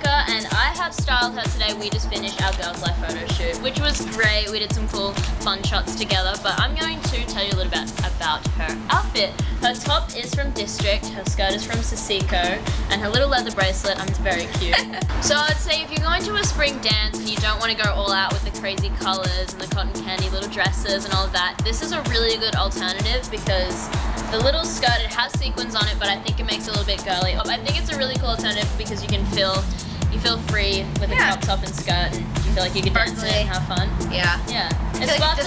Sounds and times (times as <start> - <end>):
Music: 0.0 - 35.4
Speech: 24.4 - 35.4.